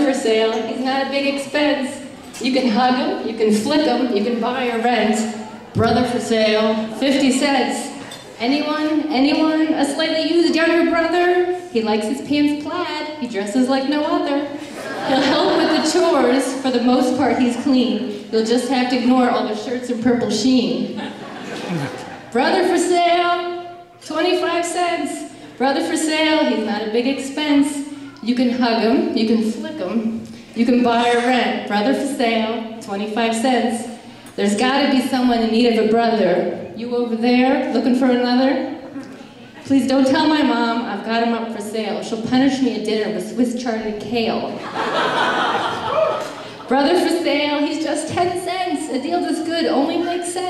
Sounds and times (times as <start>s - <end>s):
Female speech, woman speaking: 0.0s - 21.0s, 22.4s - 38.8s, 39.6s - 44.6s, 46.7s - 50.5s.